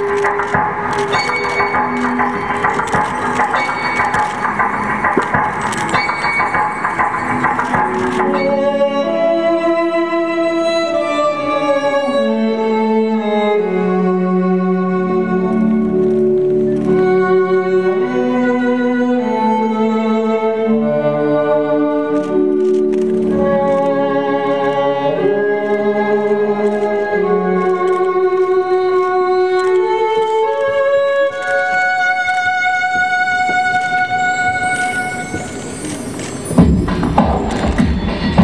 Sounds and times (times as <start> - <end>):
Music: 0.0 - 38.4.